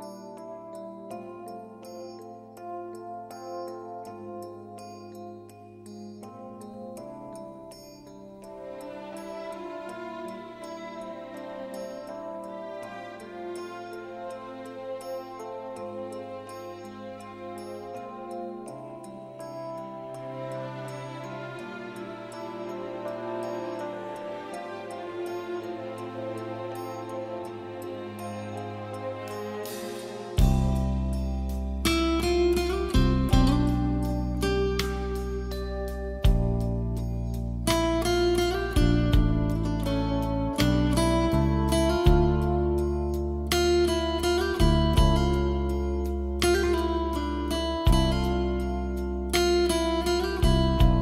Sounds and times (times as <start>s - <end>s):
Music: 0.0s - 51.0s.